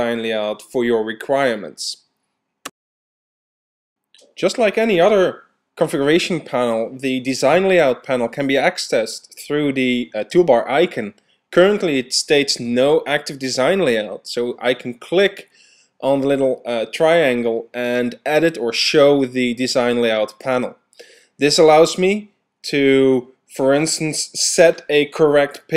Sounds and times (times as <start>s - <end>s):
Speech: 0.0s - 2.1s, 4.2s - 20.8s, 21.4s - 25.7s.